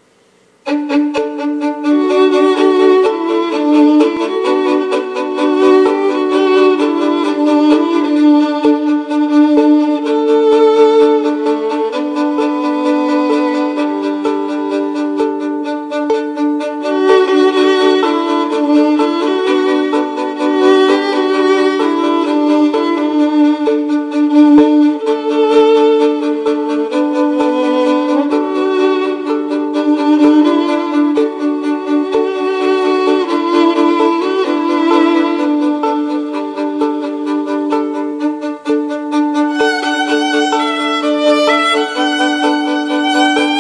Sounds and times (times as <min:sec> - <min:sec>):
Violin, fiddle: 0:00.6 - 0:43.6.